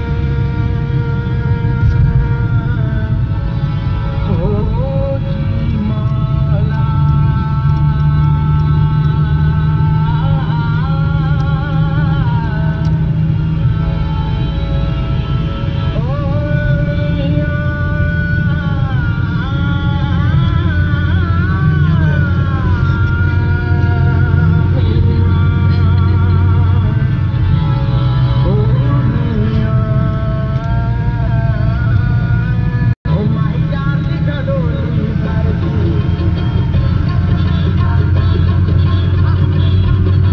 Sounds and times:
Car: 0:00.0 - 0:40.3.

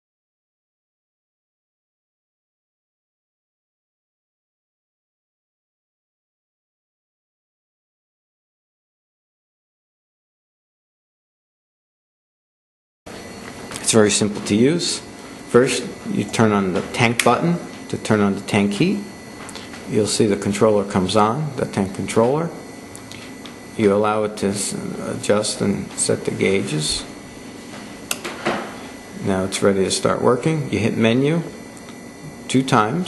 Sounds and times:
Speech: 0:13.8 - 0:19.1, 0:19.9 - 0:22.6, 0:23.8 - 0:27.1, 0:29.2 - 0:31.6, 0:32.3 - 0:33.0.

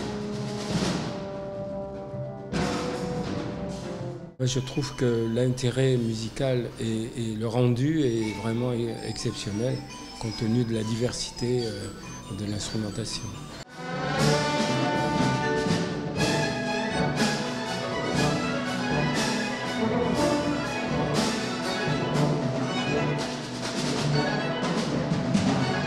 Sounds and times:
Music: 0:00.0 - 0:25.8
Speech: 0:04.4 - 0:13.6.

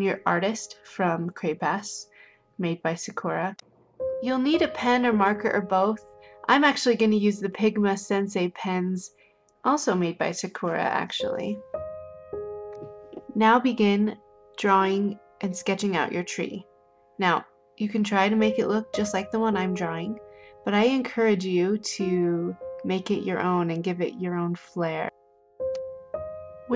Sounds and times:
Speech: 0:00.0 - 0:03.6, 0:04.2 - 0:09.1, 0:09.7 - 0:11.6, 0:13.2 - 0:16.6, 0:17.2 - 0:25.1
Music: 0:00.0 - 0:26.7.

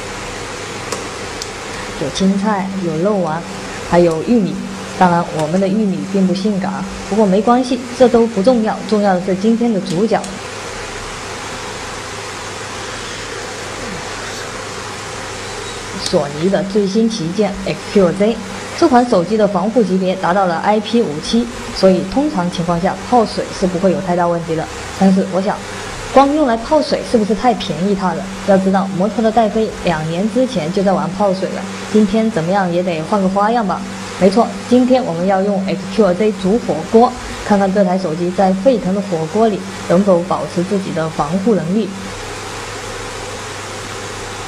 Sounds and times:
Boiling: 0:00.0 - 0:44.4
Speech: 0:01.8 - 0:10.4, 0:16.0 - 0:42.1.

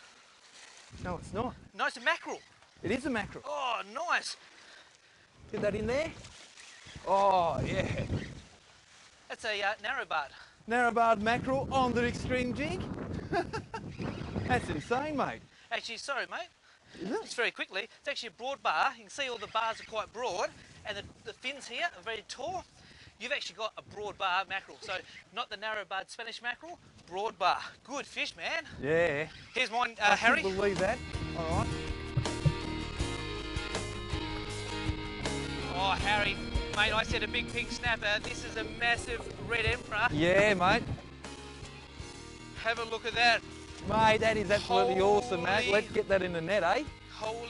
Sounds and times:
Outside, rural or natural: 0:00.0 - 0:47.5.

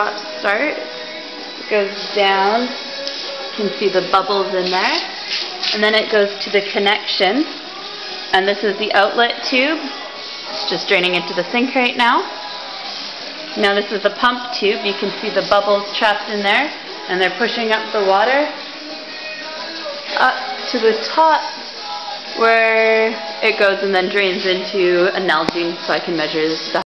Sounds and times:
Speech: 0:00.0 - 0:00.8, 0:01.7 - 0:02.8, 0:03.6 - 0:05.1, 0:05.7 - 0:07.5, 0:08.4 - 0:10.0, 0:10.6 - 0:12.3, 0:13.6 - 0:18.6, 0:20.1 - 0:21.6, 0:22.3 - 0:26.8
Music: 0:00.0 - 0:26.8.

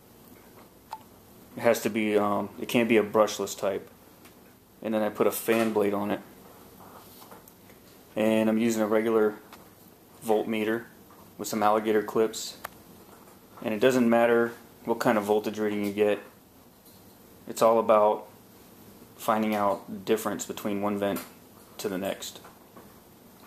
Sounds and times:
Inside, small room: 0:00.0 - 0:23.4
Speech: 0:01.6 - 0:03.9, 0:04.8 - 0:06.3, 0:08.2 - 0:09.5, 0:10.2 - 0:12.7, 0:13.6 - 0:16.4, 0:17.5 - 0:18.3, 0:19.2 - 0:22.5.

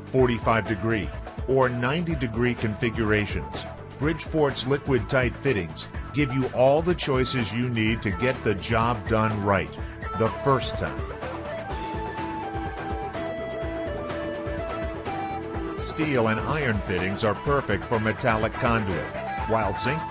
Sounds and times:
Music: 0:00.0 - 0:20.1
Speech: 0:00.1 - 0:11.0, 0:15.8 - 0:20.1.

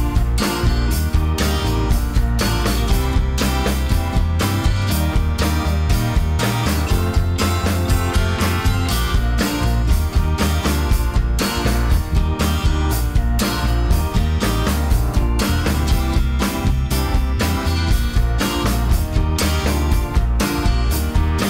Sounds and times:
Music: 0:00.0 - 0:21.4.

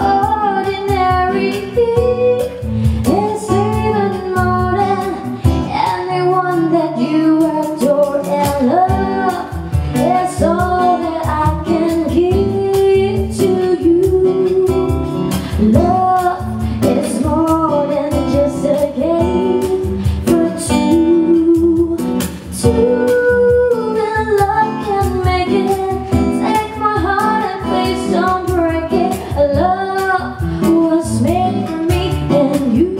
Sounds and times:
Female singing: 0:00.0 - 0:33.0
Music: 0:00.0 - 0:33.0.

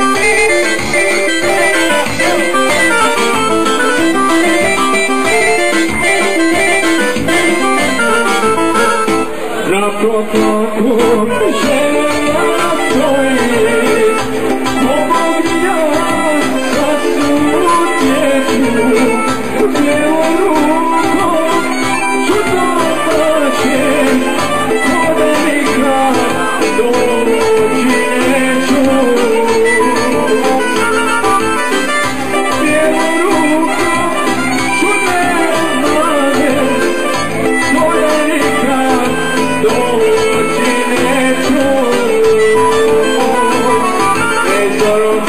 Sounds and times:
Harmonica: 0:00.0 - 0:09.7, 0:11.0 - 0:45.2
Singing: 0:09.5 - 0:31.1, 0:32.4 - 0:45.2.

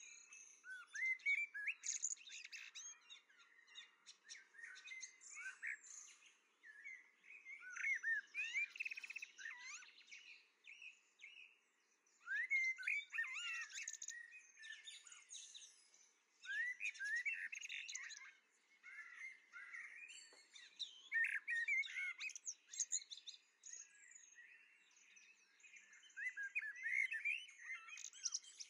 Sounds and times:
Bird: 0:00.0 - 0:28.7.

